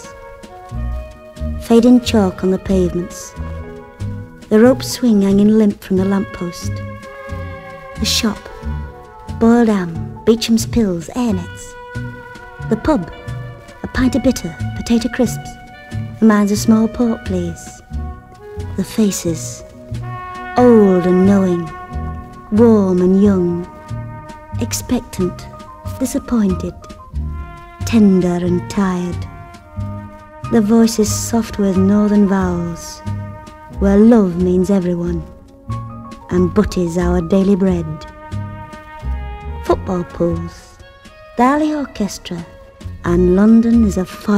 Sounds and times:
Music: 0.0 - 44.3
Speech: 1.6 - 3.4, 4.5 - 6.8, 8.0 - 8.7, 9.4 - 11.8, 12.6 - 13.2, 13.8 - 15.6, 16.2 - 17.8, 18.8 - 19.6, 20.6 - 21.8, 22.5 - 23.7, 24.6 - 26.8, 27.8 - 29.3, 30.5 - 33.0, 33.8 - 35.4, 36.3 - 38.1, 39.6 - 40.8, 41.4 - 44.3.

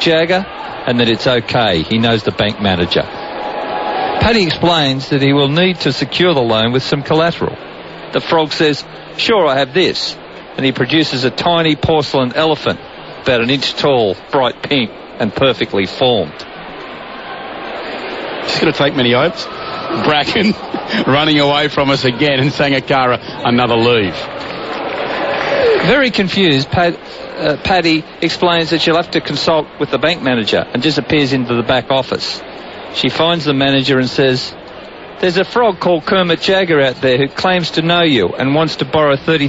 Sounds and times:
Speech: 0.0 - 3.1, 4.2 - 16.5, 18.5 - 24.3, 25.8 - 32.4, 33.0 - 34.6, 35.2 - 39.4.

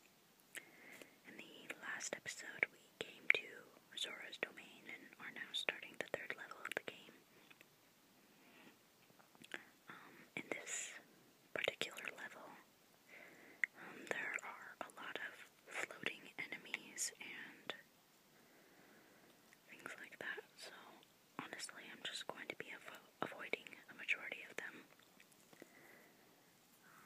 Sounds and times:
Whispering: 1.2 - 7.2, 9.5 - 12.7, 13.6 - 17.9, 19.7 - 25.0, 26.8 - 27.0.

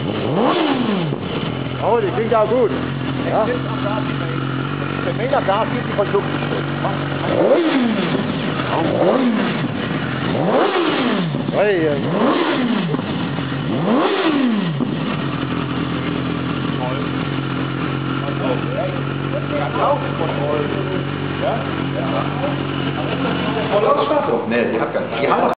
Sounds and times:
Speech: 1.8 - 4.4, 5.0 - 7.1, 11.6 - 12.1, 16.7 - 17.1, 18.2 - 25.5.

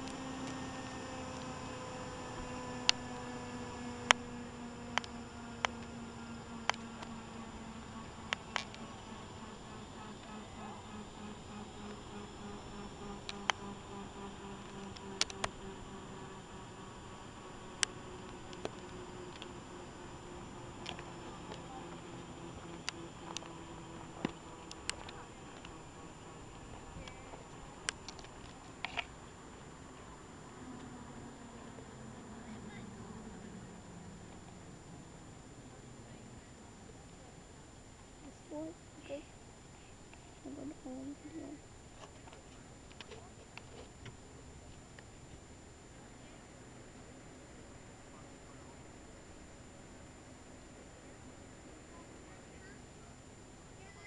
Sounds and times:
Helicopter: 0.0 - 54.0.

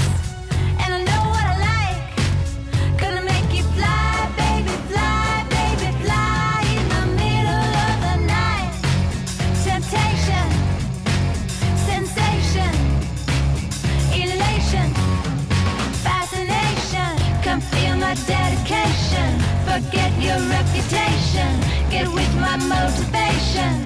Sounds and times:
Music: 0.0 - 23.8.

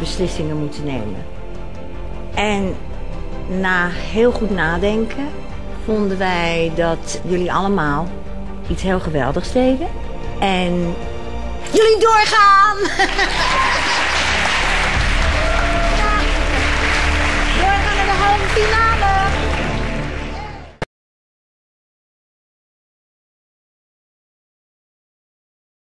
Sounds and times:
Music: 0.0 - 20.9.

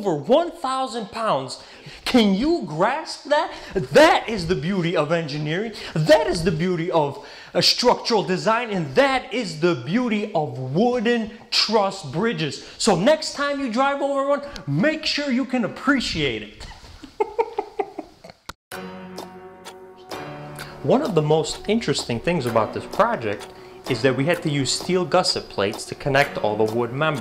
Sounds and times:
Speech: 0.0 - 16.6, 20.8 - 27.2.

